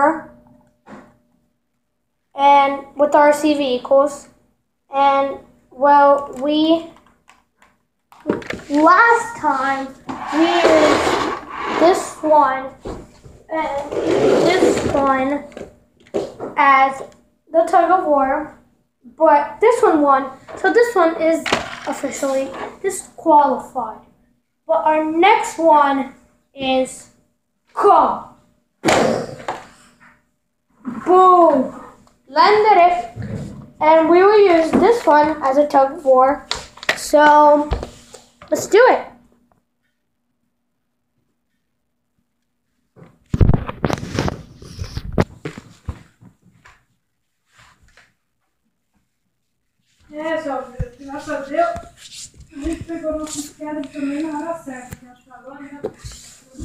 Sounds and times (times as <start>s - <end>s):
Speech: 8.7s - 11.0s, 13.5s - 15.5s, 16.6s - 24.0s, 24.7s - 27.1s, 27.8s - 28.4s, 31.0s - 33.2s, 33.8s - 37.8s, 50.1s - 52.0s, 52.6s - 56.6s.